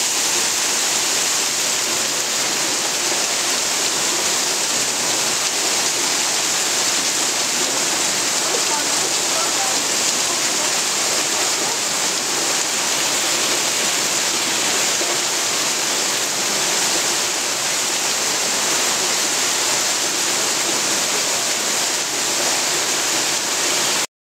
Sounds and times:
Waterfall: 0:00.0 - 0:24.1.

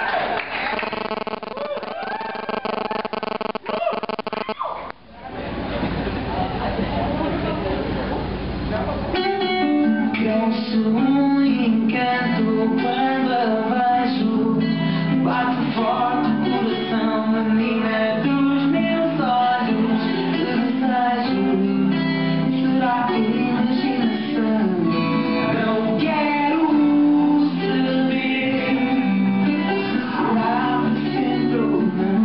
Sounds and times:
Vocal music: 0:09.1 - 0:32.2.

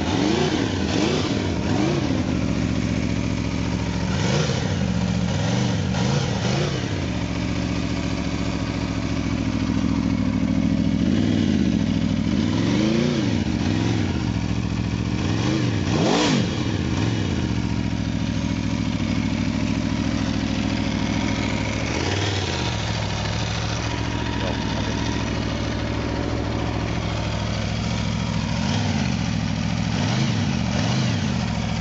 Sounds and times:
Lawn mower: 0:00.0 - 0:31.8
Motorcycle: 0:00.0 - 0:31.8.

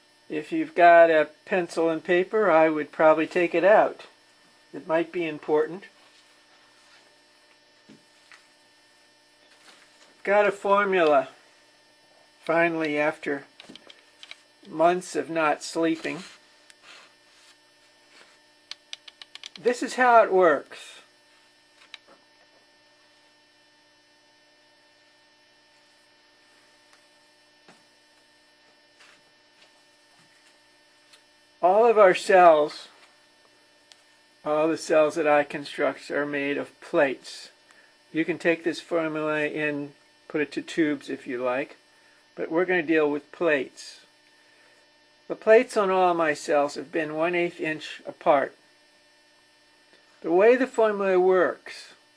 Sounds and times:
Speech: 0:00.3 - 0:06.0, 0:10.2 - 0:11.4, 0:12.5 - 0:13.5, 0:14.6 - 0:16.3, 0:19.6 - 0:21.1, 0:31.6 - 0:33.0, 0:34.4 - 0:41.8, 0:42.4 - 0:44.1, 0:45.3 - 0:48.6, 0:50.2 - 0:52.0.

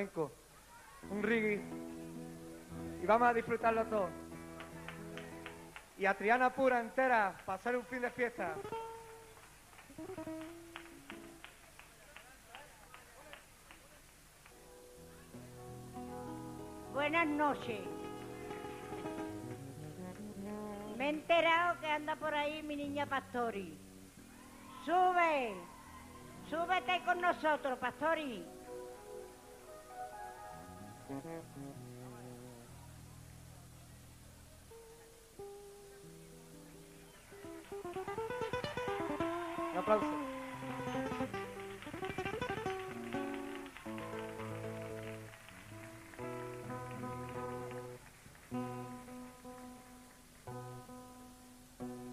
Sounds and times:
Music: 0:01.0 - 0:11.6, 0:14.4 - 0:52.1
Speech: 0:03.0 - 0:04.2, 0:06.0 - 0:08.7, 0:16.9 - 0:18.0, 0:20.9 - 0:23.8, 0:26.4 - 0:28.6, 0:39.6 - 0:40.3.

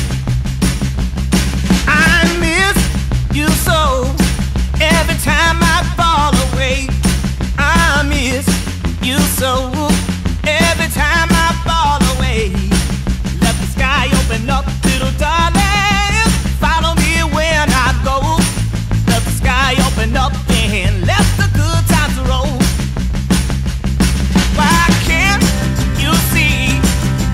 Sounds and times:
Music: 0:00.0 - 0:27.3.

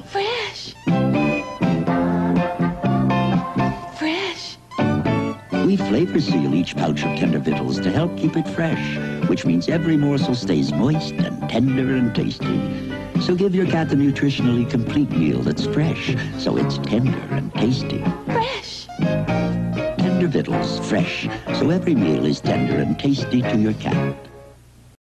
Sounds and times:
Music: 0:00.0 - 0:24.7
Speech: 0:05.6 - 0:18.9, 0:20.0 - 0:24.2.

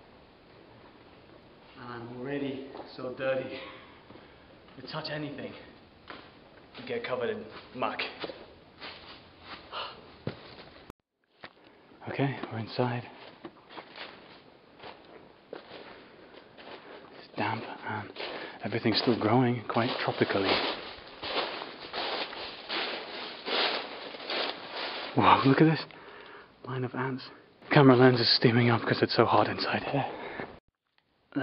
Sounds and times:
Speech: 0:01.8 - 0:03.8, 0:04.8 - 0:05.8, 0:06.8 - 0:08.3, 0:12.0 - 0:13.2, 0:17.3 - 0:20.8, 0:25.2 - 0:25.9, 0:26.7 - 0:30.2.

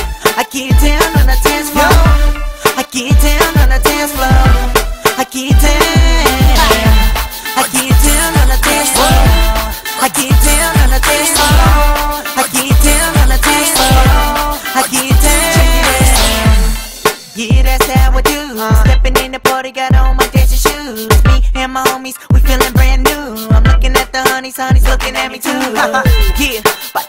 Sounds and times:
Dance music: 0:00.0 - 0:27.0.

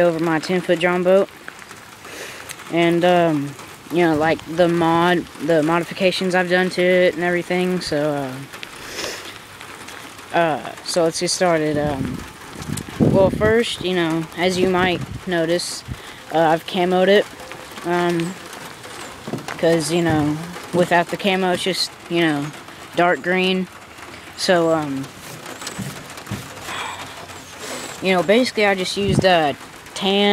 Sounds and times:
Speech: 0:00.0 - 0:01.3, 0:02.7 - 0:08.5, 0:10.3 - 0:12.2, 0:13.1 - 0:18.4, 0:19.6 - 0:23.7, 0:24.4 - 0:25.1, 0:28.0 - 0:30.3.

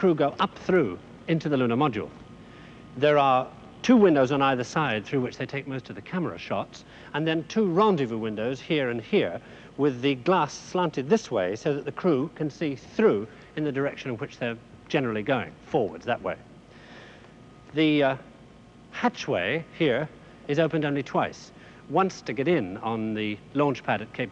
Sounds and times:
Speech: 0:00.0 - 0:02.2, 0:03.0 - 0:16.4, 0:17.7 - 0:18.3, 0:19.0 - 0:24.3.

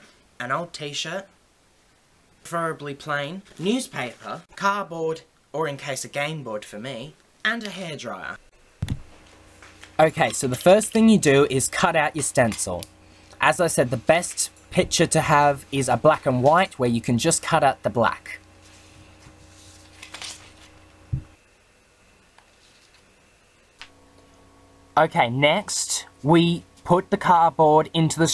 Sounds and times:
Speech: 0:00.4 - 0:01.3, 0:02.4 - 0:08.4, 0:10.0 - 0:18.4, 0:25.0 - 0:28.3.

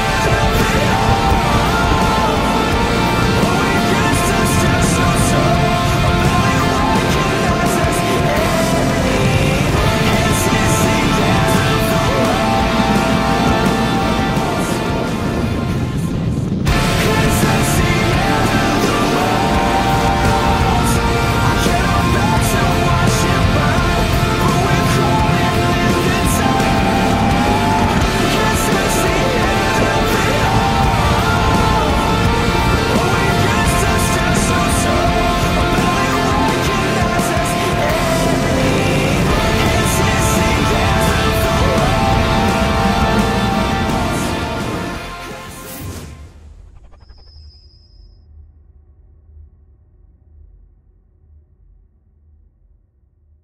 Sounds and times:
Exciting music: 0:00.0 - 0:46.9.

